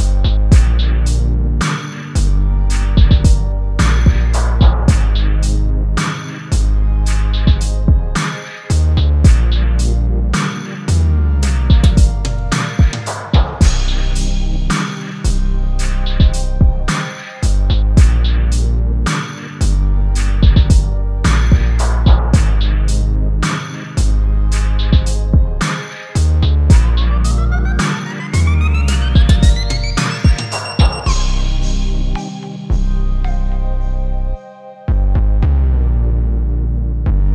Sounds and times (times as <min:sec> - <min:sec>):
Drum machine: 0:00.0 - 0:10.8, 0:11.4 - 0:32.9
Drum: 0:03.0 - 0:05.2, 0:11.4 - 0:14.0, 0:16.2 - 0:17.1, 0:17.7 - 0:18.2, 0:20.4 - 0:22.7, 0:24.8 - 0:25.8, 0:26.7 - 0:31.4.